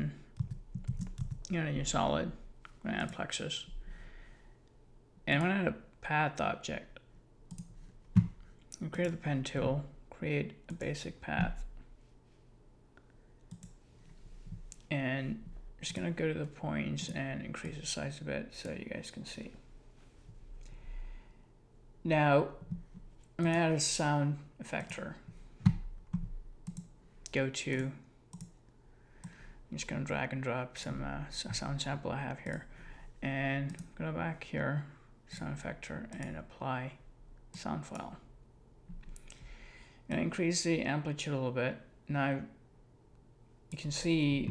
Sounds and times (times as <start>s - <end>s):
Speech: 1.5s - 3.7s, 5.3s - 7.0s, 8.8s - 11.7s, 14.9s - 19.6s, 22.0s - 22.6s, 23.4s - 25.3s, 27.3s - 28.0s, 29.7s - 38.3s, 40.1s - 42.6s, 43.8s - 44.5s.